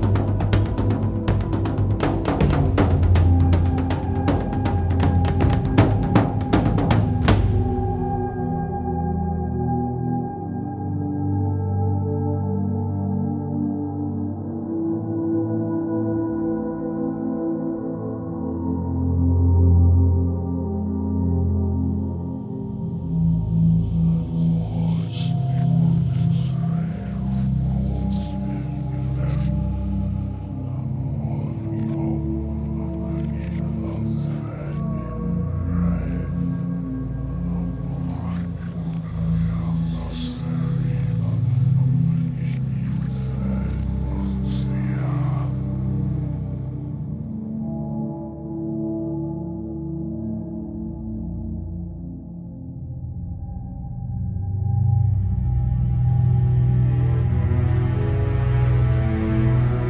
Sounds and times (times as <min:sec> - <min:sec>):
New-age music: 0:00.0 - 0:59.9.